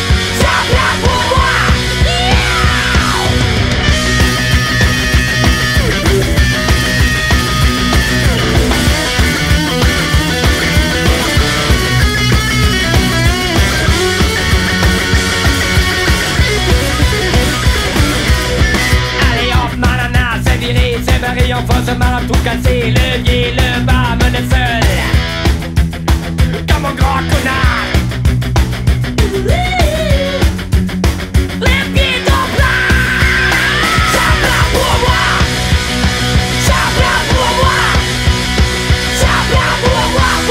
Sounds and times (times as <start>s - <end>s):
Heavy metal: 0.0s - 40.5s.